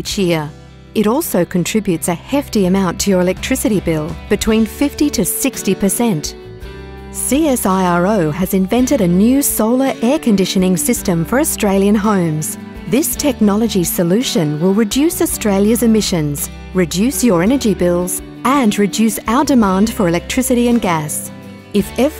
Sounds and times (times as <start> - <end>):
Speech: 0.0 - 6.4, 7.2 - 22.2
Music: 0.0 - 22.2.